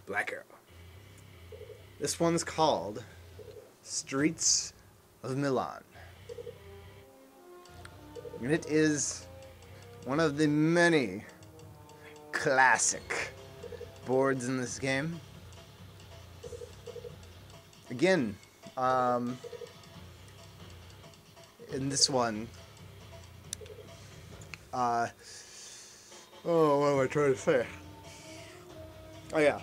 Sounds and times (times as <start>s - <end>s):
Speech: 0.0s - 0.6s, 2.0s - 3.0s, 3.9s - 5.9s, 8.4s - 9.2s, 10.1s - 11.3s, 12.3s - 13.3s, 14.1s - 15.2s, 17.9s - 19.4s, 21.7s - 22.5s, 24.8s - 25.2s, 26.4s - 27.8s, 29.3s - 29.6s
Music: 5.9s - 29.6s.